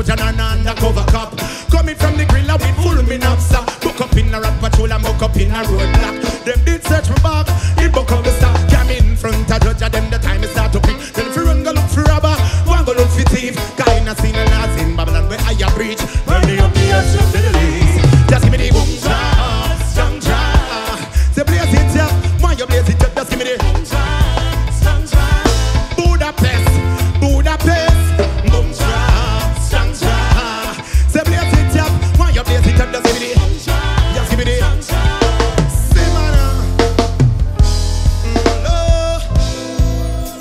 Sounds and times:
Jazz: 0.0s - 40.4s
Pop music: 0.0s - 40.4s.

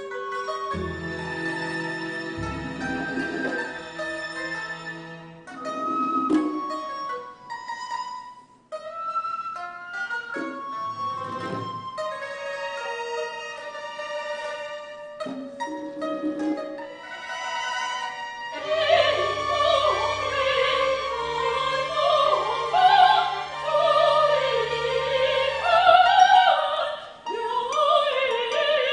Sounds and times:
Classical music: 0.0s - 28.9s
Pizzicato: 0.0s - 28.9s.

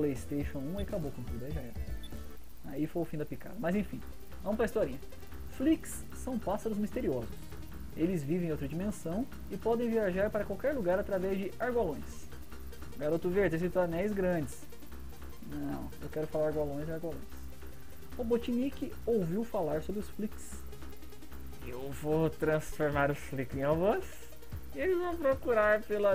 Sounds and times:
Speech: 0.0s - 1.8s, 2.6s - 5.0s, 5.6s - 7.3s, 8.0s - 12.3s, 13.0s - 14.6s, 15.5s - 17.3s, 18.2s - 20.6s, 21.6s - 24.2s, 24.8s - 26.1s
Music: 0.0s - 26.1s.

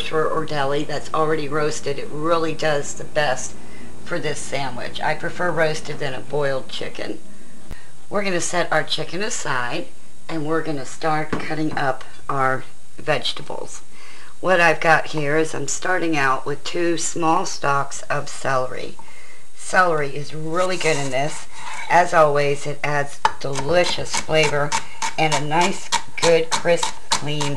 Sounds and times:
Speech: 0.0s - 7.2s, 8.1s - 19.0s, 19.6s - 27.5s.

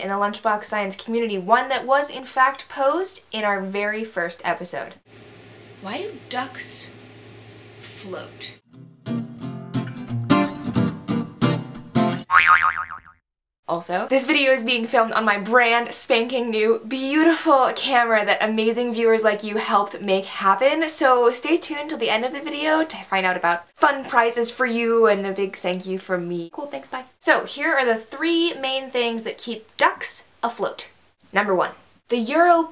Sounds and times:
Speech: 0.0s - 5.0s, 5.8s - 7.0s, 7.8s - 8.6s, 13.7s - 32.7s
Music: 8.7s - 12.3s
Boing: 12.3s - 13.2s.

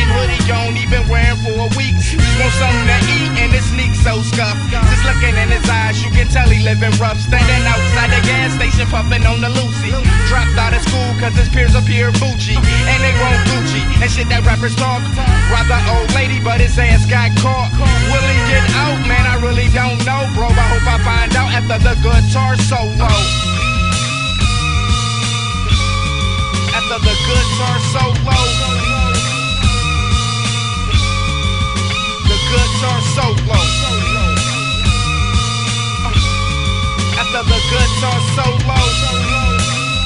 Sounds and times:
Guitar: 0.0s - 40.0s.

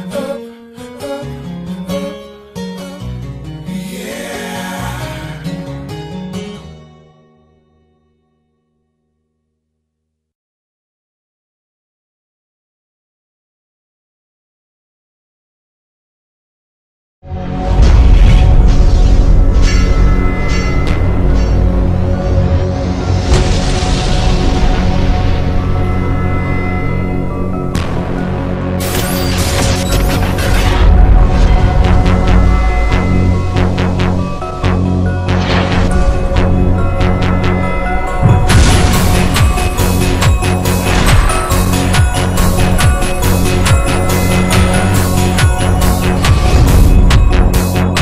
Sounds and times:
Scary music: 0.0s - 7.7s, 17.3s - 48.0s.

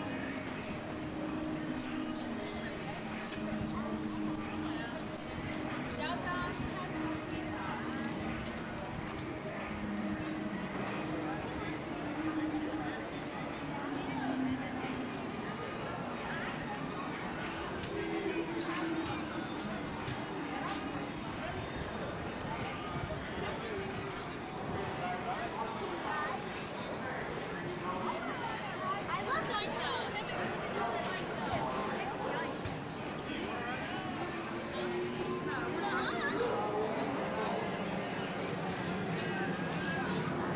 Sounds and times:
Speech: 0.0s - 40.5s.

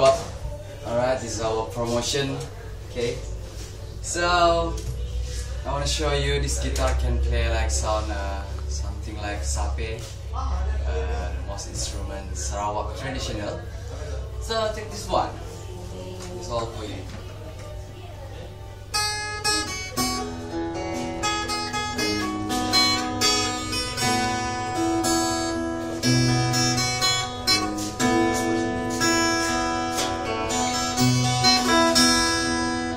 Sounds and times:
Acoustic guitar: 0.0s - 32.9s.

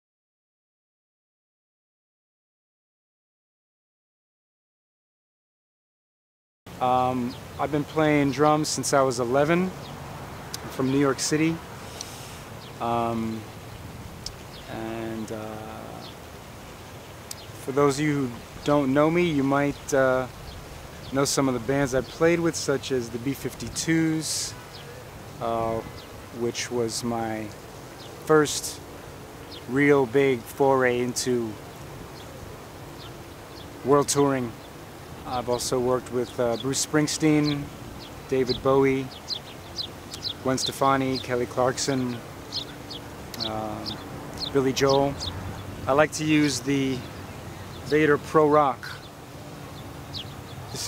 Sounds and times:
Speech: 6.8s - 9.8s, 10.7s - 11.6s, 12.8s - 13.5s, 14.7s - 16.1s, 17.6s - 20.3s, 21.2s - 24.6s, 25.4s - 27.6s, 28.3s - 28.8s, 29.7s - 31.6s, 33.8s - 34.6s, 35.3s - 37.7s, 38.3s - 39.1s, 40.4s - 42.2s, 43.4s - 45.2s, 45.9s - 47.1s, 47.9s - 49.0s.

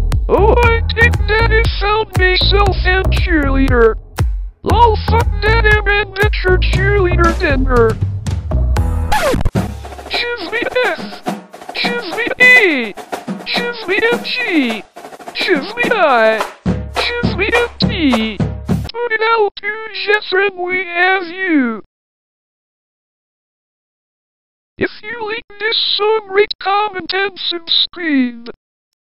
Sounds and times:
Music: 0.0s - 18.9s
Speech: 0.3s - 4.0s, 4.7s - 8.0s, 10.1s - 21.9s, 24.8s - 28.6s.

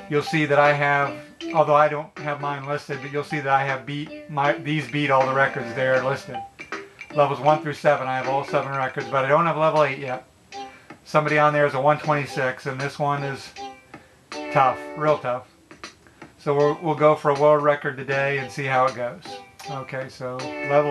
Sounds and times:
Background music: 0.0s - 20.9s
Speech: 0.1s - 6.4s, 7.2s - 10.2s, 11.1s - 13.6s, 14.5s - 15.5s, 16.4s - 20.9s.

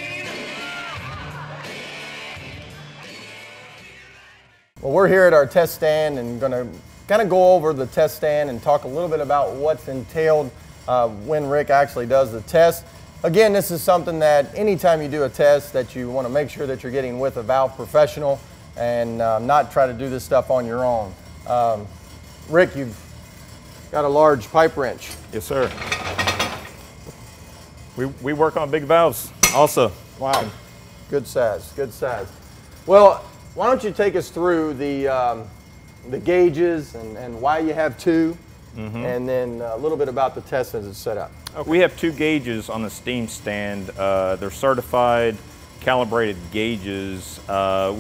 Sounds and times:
Music: 0.0s - 4.9s
Speech: 4.8s - 21.9s, 24.0s - 25.8s, 28.0s - 32.3s, 36.1s - 48.0s.

